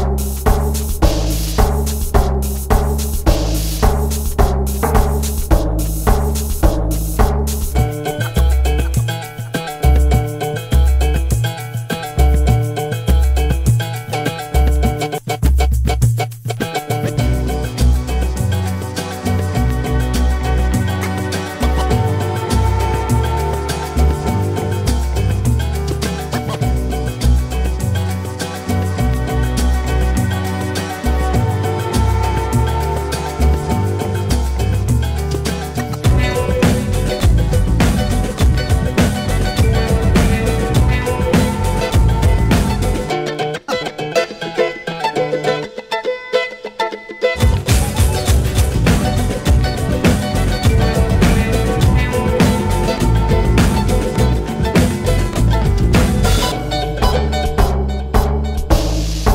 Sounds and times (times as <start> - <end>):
Music: 0.0 - 59.3.